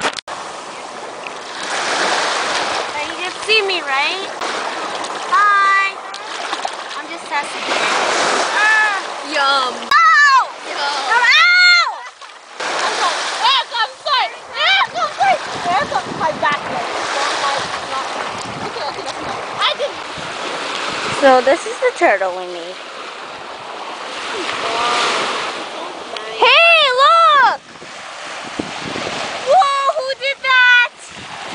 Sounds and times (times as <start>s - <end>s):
Waves, surf: 0.0s - 31.5s
Wind noise (microphone): 14.4s - 21.5s, 27.4s - 31.5s.